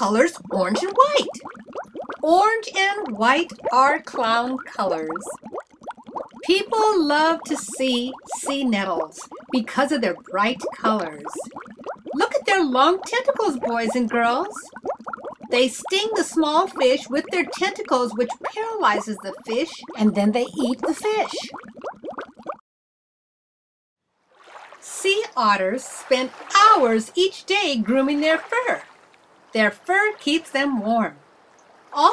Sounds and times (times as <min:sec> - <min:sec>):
Speech: 0:00.0 - 0:01.4, 0:02.2 - 0:05.3, 0:06.5 - 0:11.4, 0:12.2 - 0:14.7, 0:15.5 - 0:21.5, 0:24.9 - 0:28.9, 0:29.6 - 0:31.2.